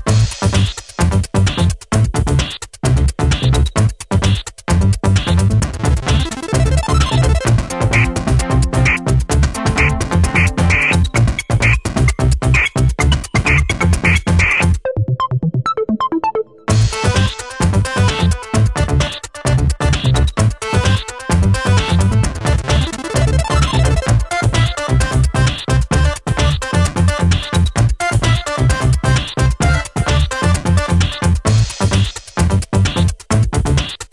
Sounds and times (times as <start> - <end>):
Funk: 0.0 - 14.8, 16.7 - 34.1
Blues: 0.1 - 14.8
Soundtrack music: 5.2 - 31.3.